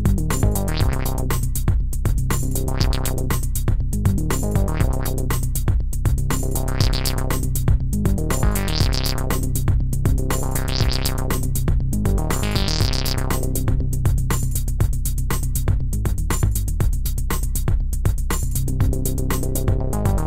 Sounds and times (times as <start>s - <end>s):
Music: 0.0s - 20.2s.